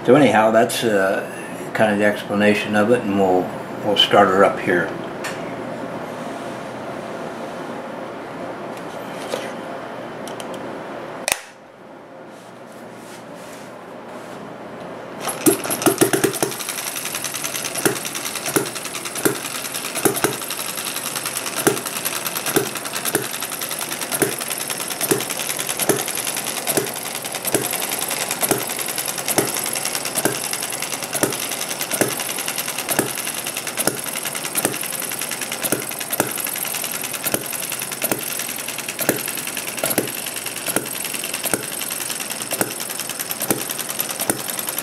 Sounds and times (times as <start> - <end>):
Sewing machine: 15.2 - 44.8.